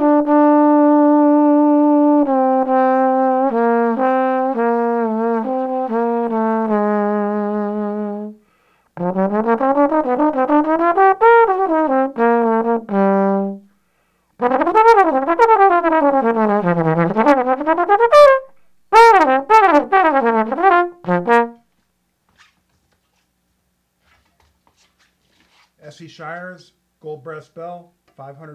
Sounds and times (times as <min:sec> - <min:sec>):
Trombone: 0:00.0 - 0:08.4, 0:09.0 - 0:13.7, 0:14.4 - 0:21.7.